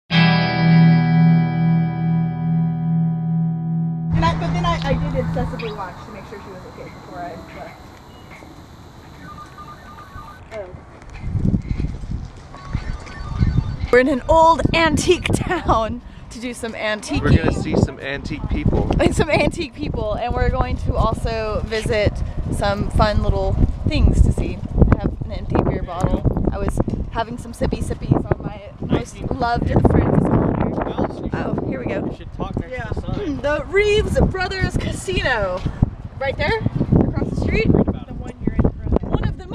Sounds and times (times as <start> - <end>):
Music: 0.1 - 5.7
Outside, urban or manmade: 0.1 - 39.5.